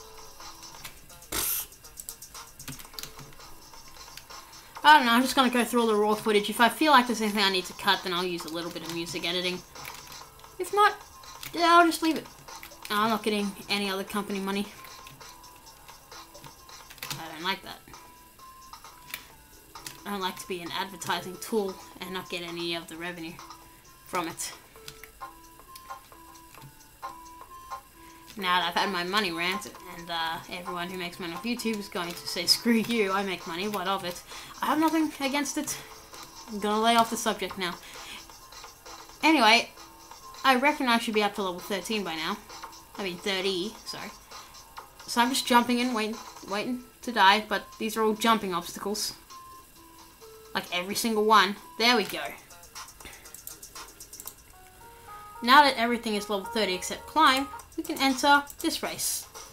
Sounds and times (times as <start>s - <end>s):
Music: 0.0s - 59.5s
Speech: 4.8s - 9.6s, 10.6s - 12.2s, 12.9s - 14.8s, 17.2s - 17.8s, 20.0s - 23.4s, 24.1s - 24.6s, 28.4s - 35.8s, 36.5s - 37.8s, 39.2s - 39.7s, 40.4s - 42.4s, 43.0s - 44.1s, 45.1s - 49.2s, 50.6s - 52.4s, 55.4s - 59.3s.